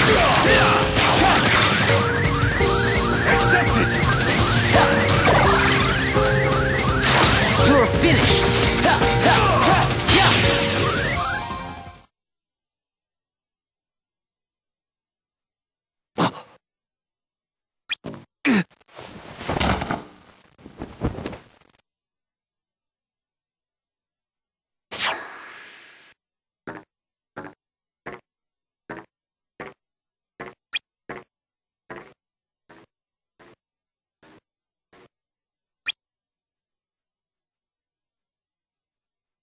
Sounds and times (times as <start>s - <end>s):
Music: 0.0s - 12.1s.